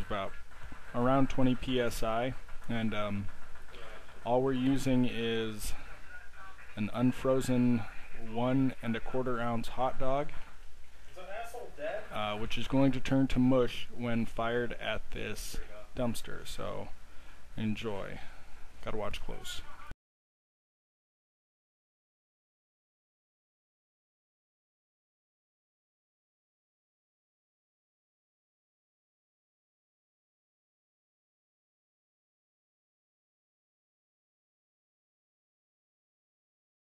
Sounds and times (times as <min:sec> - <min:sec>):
Speech: 0:00.0 - 0:10.4, 0:11.2 - 0:17.0, 0:17.6 - 0:20.0.